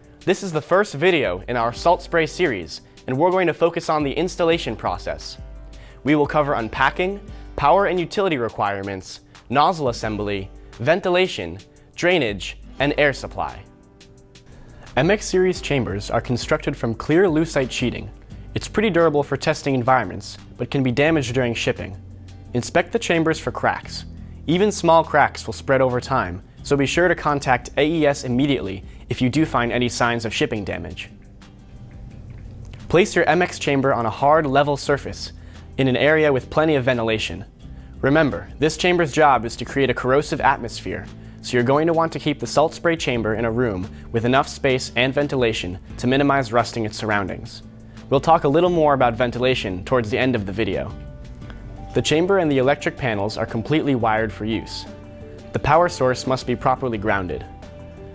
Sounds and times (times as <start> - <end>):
Speech: 0.3 - 5.4, 6.0 - 13.7, 15.0 - 31.2, 32.9 - 51.0, 51.9 - 54.9, 55.5 - 57.5.